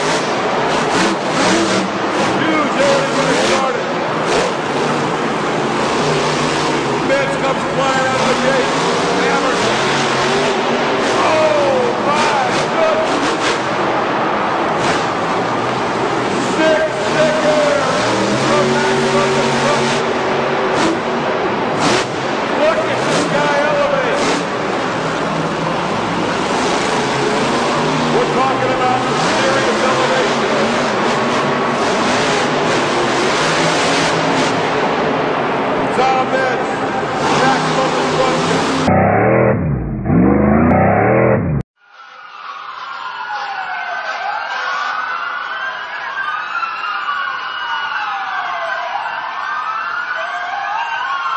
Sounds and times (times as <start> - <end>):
Vehicle: 0.0 - 41.7
Speech: 2.4 - 3.9, 7.0 - 9.7, 11.1 - 13.2, 16.4 - 20.0, 22.5 - 24.2, 28.1 - 30.8, 35.9 - 38.6.